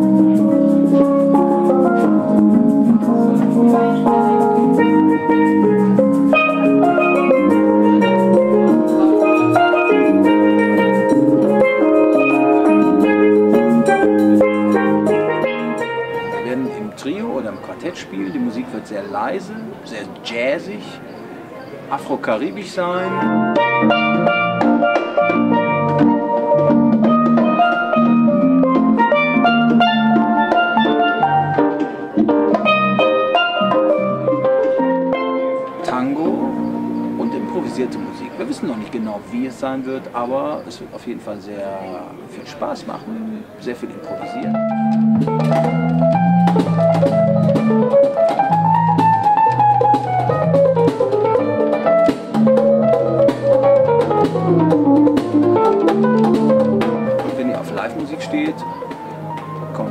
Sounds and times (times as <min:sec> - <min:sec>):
Steelpan: 0:00.0 - 0:20.0, 0:22.0 - 0:40.6
Speech: 0:16.4 - 0:21.1, 0:21.9 - 0:23.3, 0:35.8 - 0:36.5, 0:37.2 - 0:44.6, 0:57.2 - 0:58.7.